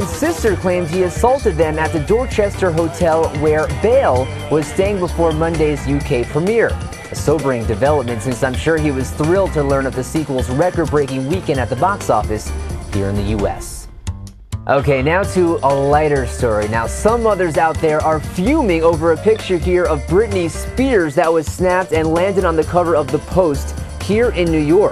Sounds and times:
Speech: 0.0 - 13.9, 14.7 - 24.9
Music: 0.0 - 24.9.

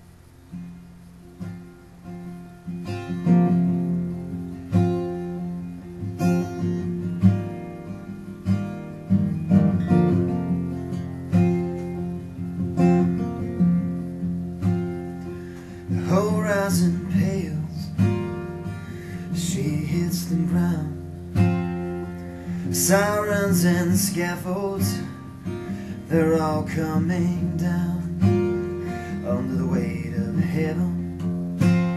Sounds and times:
Music: 0.0 - 31.9.

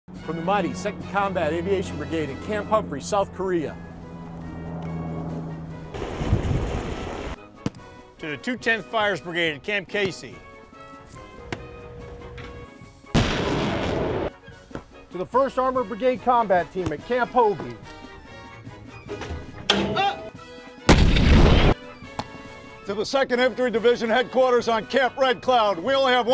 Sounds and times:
Music: 0.1 - 26.3
Speech: 0.3 - 3.8, 8.2 - 10.4, 15.1 - 17.8, 22.9 - 26.3.

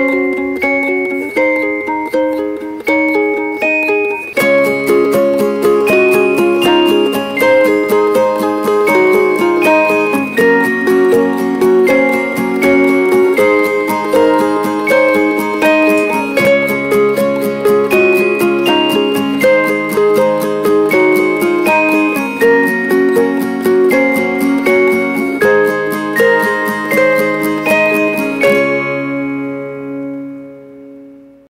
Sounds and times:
Music: 0.0 - 31.4.

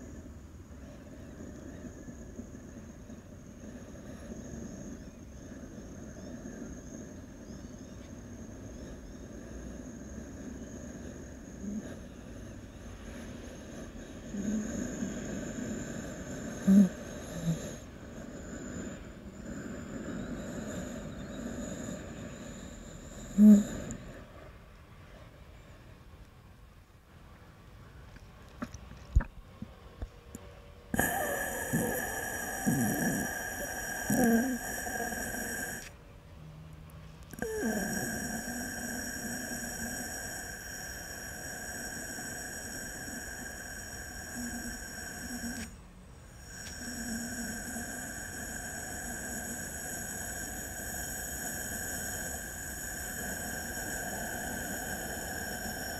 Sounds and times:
Breathing: 0.0 - 26.0, 31.0 - 36.0, 37.4 - 55.9.

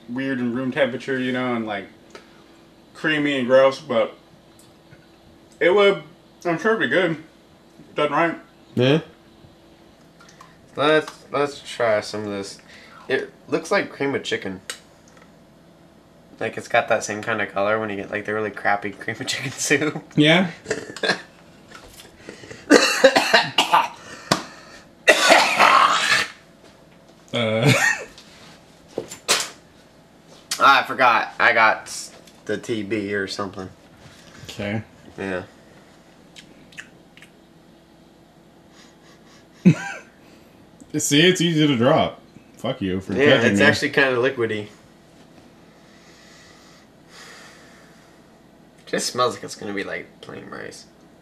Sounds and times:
Inside, small room: 0.0 - 51.2
Speech: 0.1 - 2.0, 3.0 - 4.2, 5.6 - 7.3, 10.8 - 14.6, 16.4 - 20.6, 30.6 - 33.8, 40.9 - 44.8, 48.8 - 50.9.

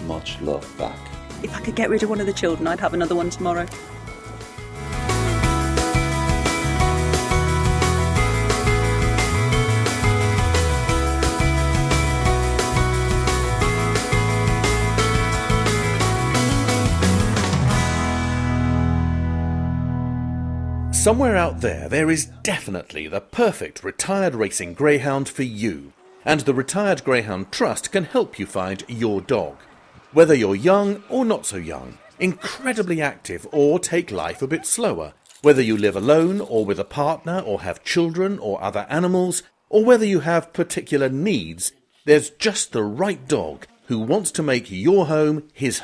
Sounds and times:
Speech: 0.0 - 3.7, 21.0 - 29.6, 30.2 - 45.8
Music: 0.0 - 22.5.

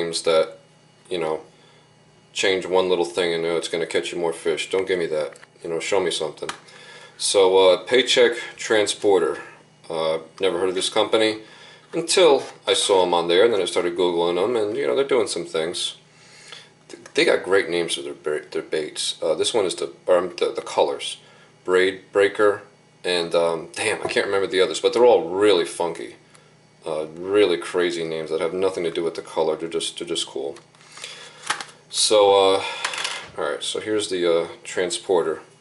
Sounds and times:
Speech: 0.0 - 1.5, 2.4 - 6.6, 7.2 - 16.0, 16.9 - 26.2, 26.8 - 30.7, 31.9 - 35.5.

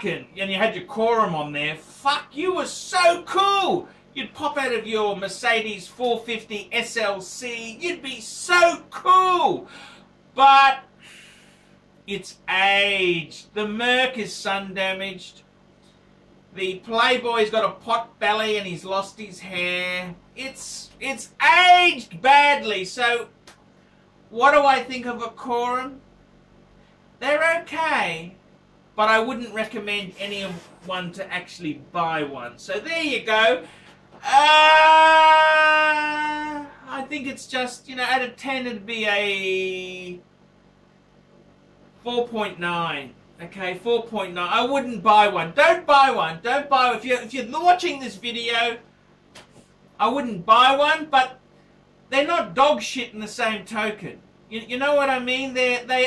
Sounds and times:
Speech: 0.0 - 9.7, 10.4 - 10.9, 12.1 - 15.5, 16.5 - 23.4, 24.3 - 26.1, 27.2 - 28.4, 29.0 - 40.3, 42.0 - 48.9, 50.0 - 51.4, 52.1 - 56.0
Inside, small room: 0.0 - 56.0.

